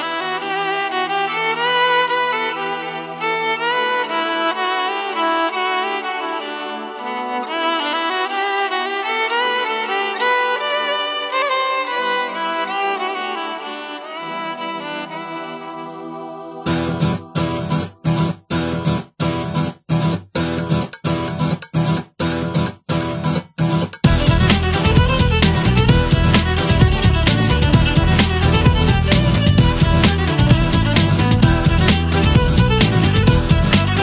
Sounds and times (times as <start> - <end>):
Rhythm and blues: 14.5 - 34.0.